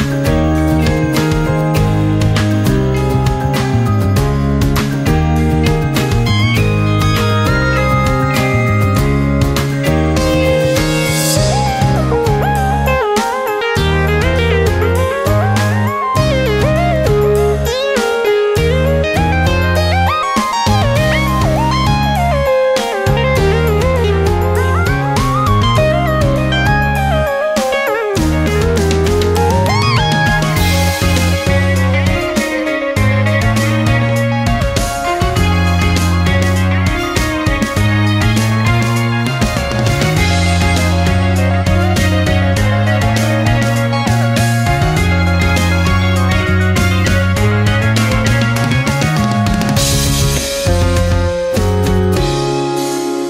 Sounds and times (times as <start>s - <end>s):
Music: 0.0s - 53.3s.